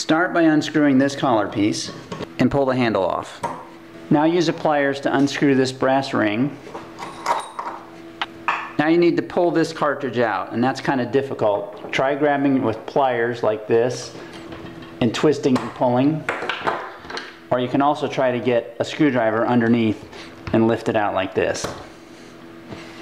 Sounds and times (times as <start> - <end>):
Speech: 0.0 - 3.5, 4.1 - 6.6, 8.8 - 14.2, 15.0 - 16.3, 17.5 - 21.8.